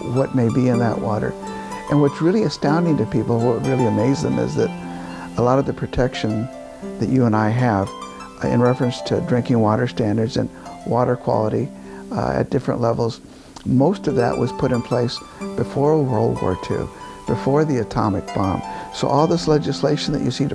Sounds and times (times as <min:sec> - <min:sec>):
Speech: 0:00.0 - 0:04.8, 0:05.4 - 0:20.5
Music: 0:00.0 - 0:20.5.